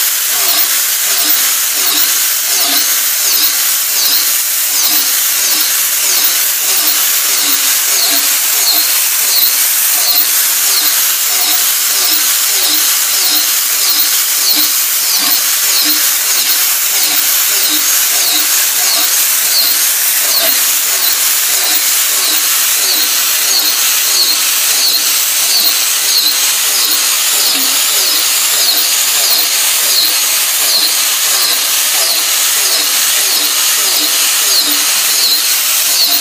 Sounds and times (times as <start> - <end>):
Dental drill, dentist's drill: 0.0 - 36.2.